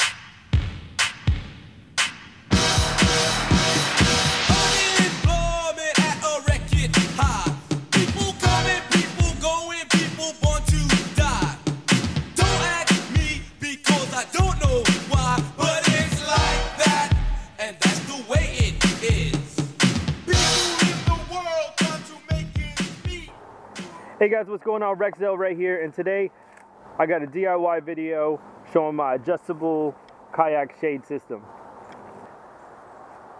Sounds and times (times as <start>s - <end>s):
Music: 0.0s - 23.3s
Speech: 23.8s - 26.3s, 27.0s - 31.5s.